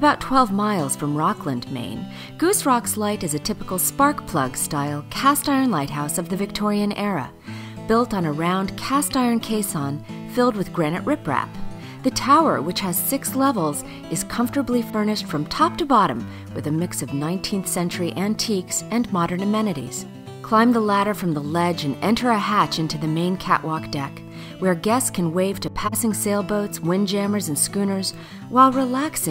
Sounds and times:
Speech: 0.0 - 7.3, 7.9 - 29.3
Music: 0.0 - 29.3.

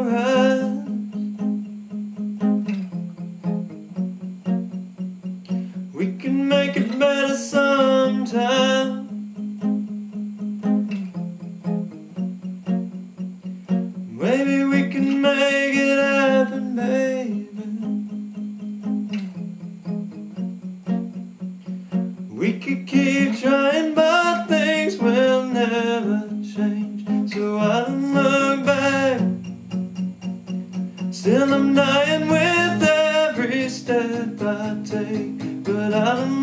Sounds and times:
Music: 0.0 - 36.4.

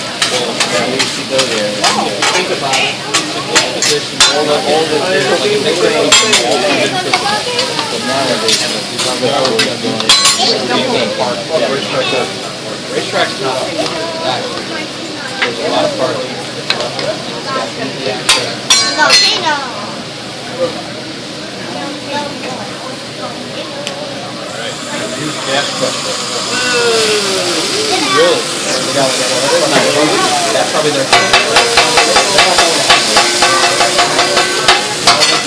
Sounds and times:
Speech: 0.3 - 20.9, 21.6 - 35.4.

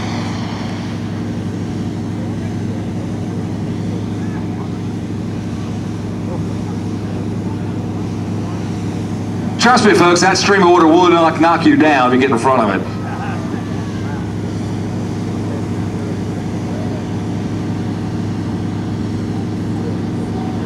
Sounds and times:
Speech: 9.5 - 20.6.

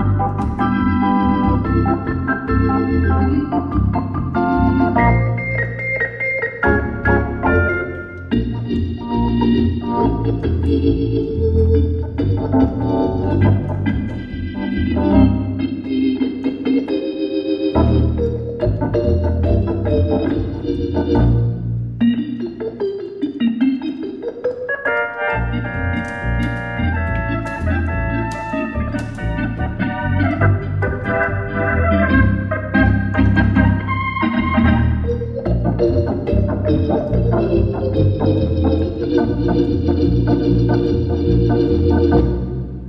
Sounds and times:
Hammond organ: 0.0 - 42.8.

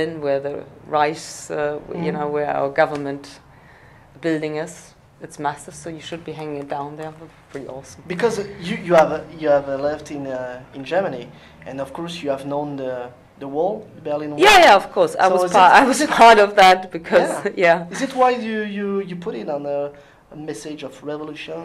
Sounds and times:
Conversation: 0.0 - 21.6.

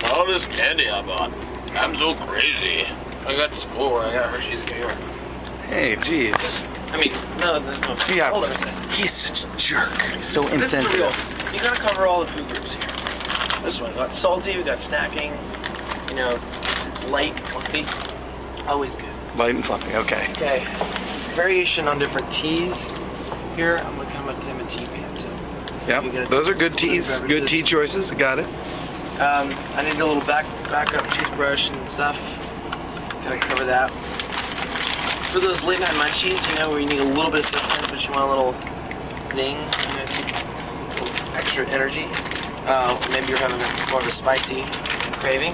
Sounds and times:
Speech: 5.6 - 12.9, 29.2 - 32.4, 35.3 - 38.6, 39.2 - 40.4, 41.0 - 45.5.

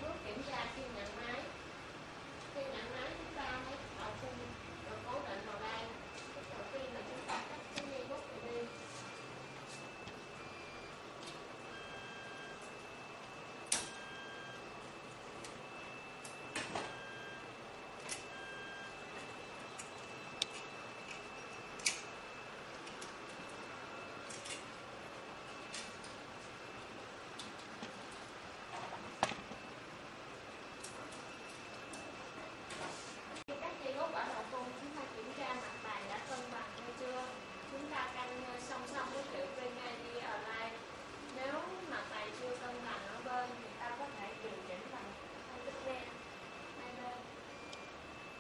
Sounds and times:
Printer: 0.0 - 48.4.

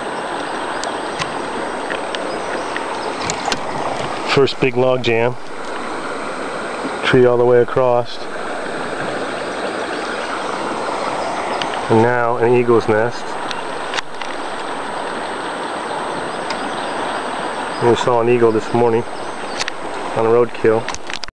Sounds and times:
Boat, Water vehicle: 0.0 - 21.3
Speech: 4.3 - 5.4, 7.0 - 8.3, 11.9 - 13.4, 17.8 - 19.1, 20.2 - 20.9.

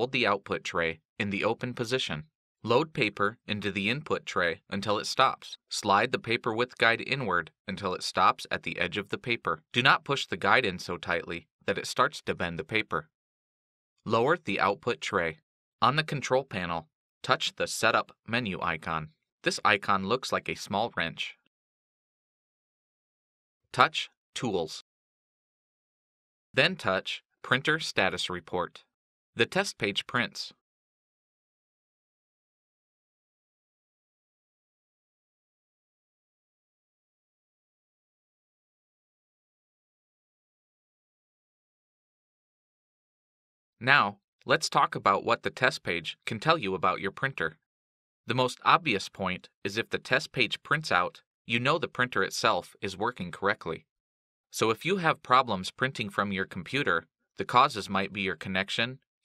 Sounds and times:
Speech: 0.0 - 13.1, 14.1 - 21.4, 23.8 - 24.9, 26.6 - 30.6, 43.8 - 47.6, 48.3 - 53.9, 54.6 - 59.0.

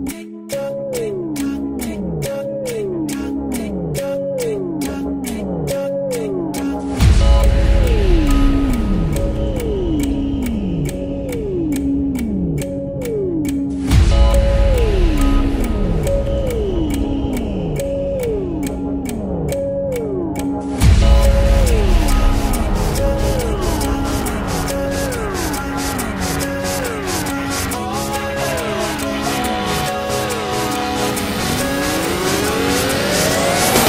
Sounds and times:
Music: 0.0 - 33.8.

